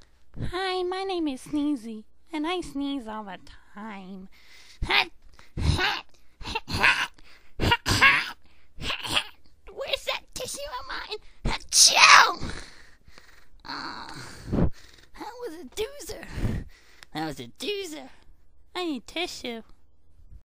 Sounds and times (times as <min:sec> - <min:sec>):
Speech: 0:17.2 - 0:18.2, 0:18.8 - 0:19.7.